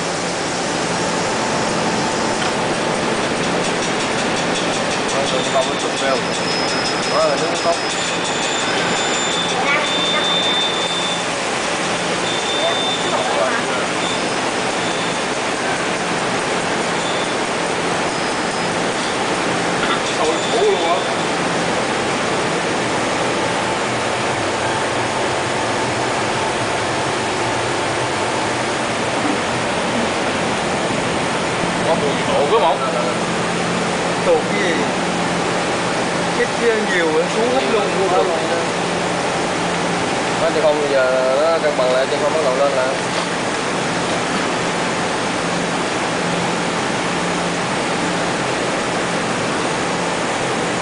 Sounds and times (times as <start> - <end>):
Speech: 5.1 - 6.4, 7.1 - 7.9, 12.6 - 14.0, 20.2 - 21.2, 31.8 - 33.2, 34.2 - 35.0, 36.3 - 38.8, 40.4 - 43.1.